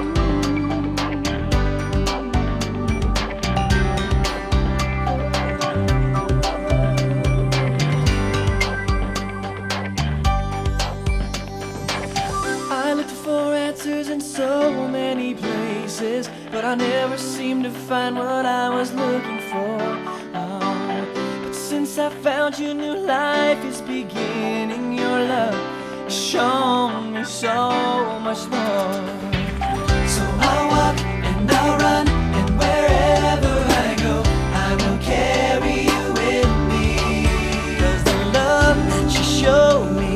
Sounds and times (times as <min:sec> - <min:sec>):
Music: 0:00.0 - 0:40.1.